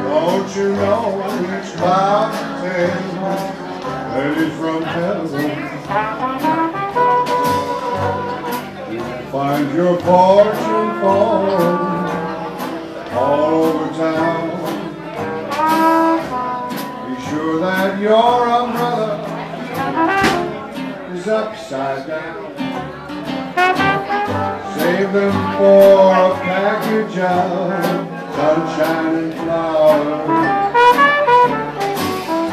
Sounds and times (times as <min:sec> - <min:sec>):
Music: 0:00.0 - 0:32.5.